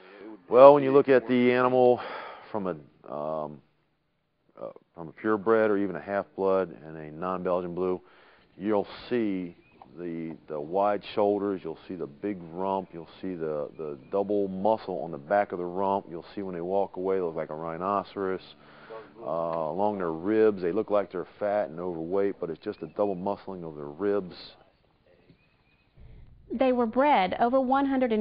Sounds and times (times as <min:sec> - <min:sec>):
Speech: 0:00.0 - 0:03.6, 0:04.6 - 0:08.0, 0:08.6 - 0:24.6, 0:26.6 - 0:28.2.